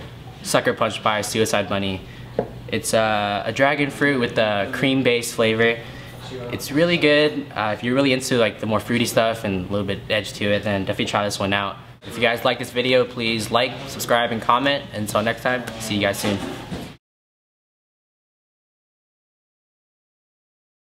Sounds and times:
Speech: 0:00.4 - 0:02.0, 0:02.7 - 0:16.5.

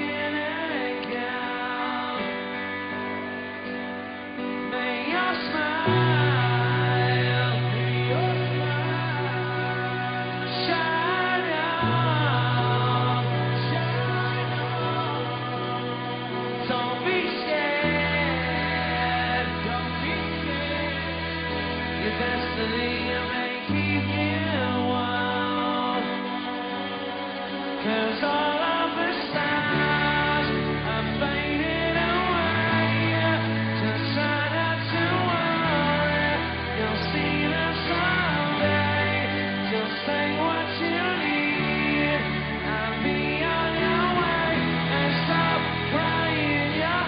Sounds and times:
Music: 0:00.0 - 0:47.0.

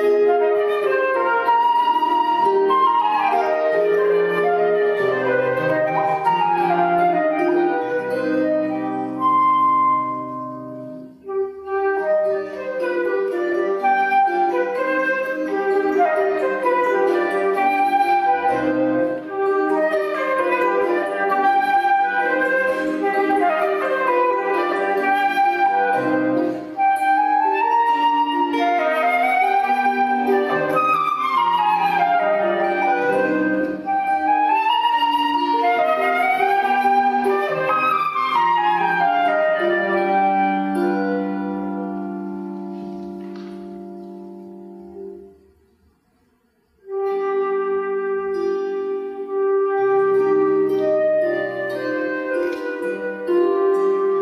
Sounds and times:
Pizzicato: 0:00.0 - 0:54.2.

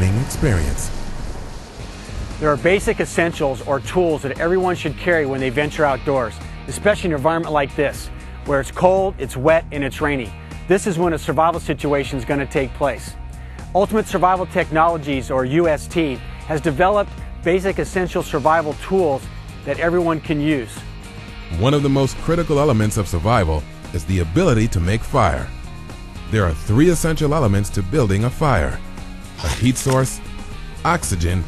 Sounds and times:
Speech: 0:00.0 - 0:00.9, 0:02.4 - 0:13.1, 0:13.8 - 0:20.8, 0:21.5 - 0:25.5, 0:26.3 - 0:28.8, 0:29.4 - 0:30.2, 0:30.9 - 0:31.4
Music: 0:00.0 - 0:31.4.

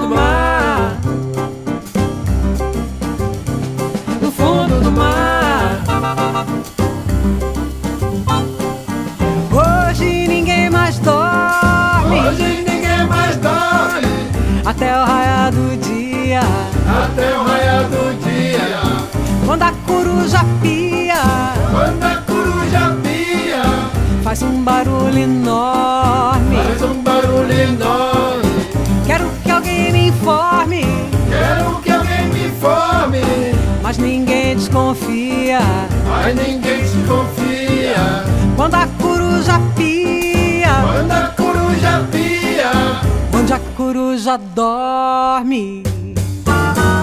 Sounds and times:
Jingle (music): 0:00.0 - 0:43.8, 0:46.3 - 0:47.0
Jazz: 0:00.0 - 0:44.4, 0:45.4 - 0:47.0.

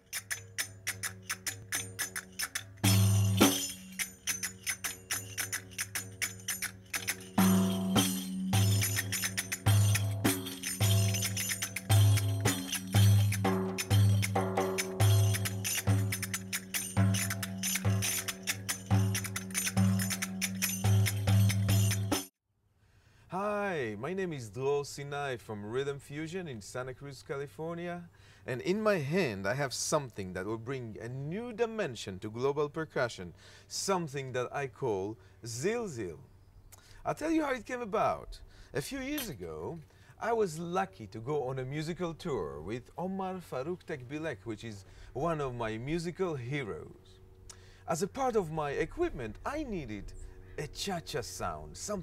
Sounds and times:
Speech: 0:23.3 - 0:36.3, 0:37.0 - 0:47.2, 0:47.9 - 0:52.0.

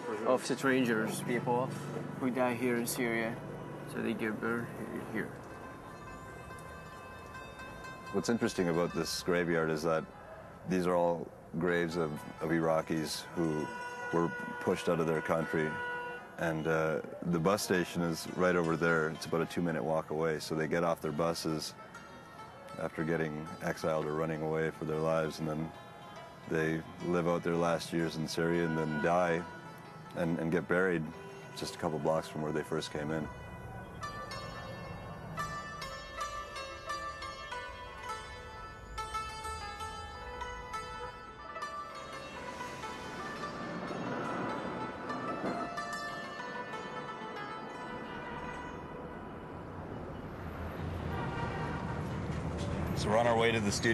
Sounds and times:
Music: 0:00.0 - 0:53.9
Speech: 0:10.7 - 0:15.8, 0:16.4 - 0:21.8, 0:22.8 - 0:25.7, 0:26.5 - 0:29.4, 0:30.2 - 0:33.3, 0:53.0 - 0:53.9.

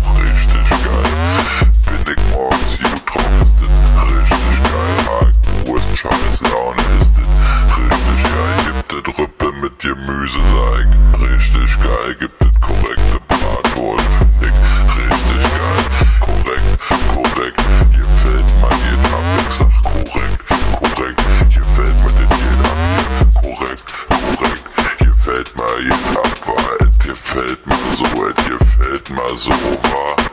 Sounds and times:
Dubstep: 0:00.0 - 0:08.9, 0:10.4 - 0:30.3.

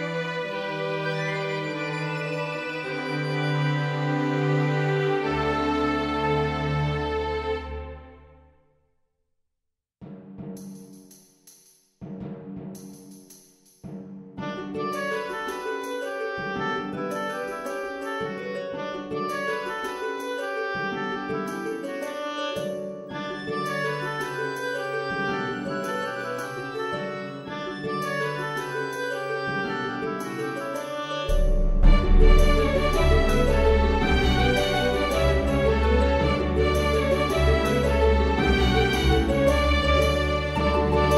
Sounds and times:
Music: 0:00.0 - 0:09.2, 0:10.0 - 0:41.1.

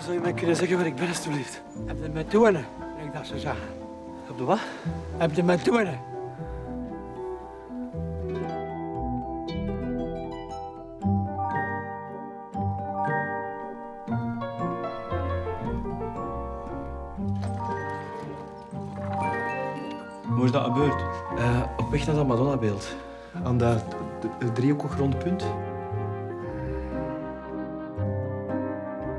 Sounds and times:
Speech: 0:00.0 - 0:03.7, 0:04.3 - 0:06.0, 0:20.3 - 0:25.6
Music: 0:00.0 - 0:29.1.

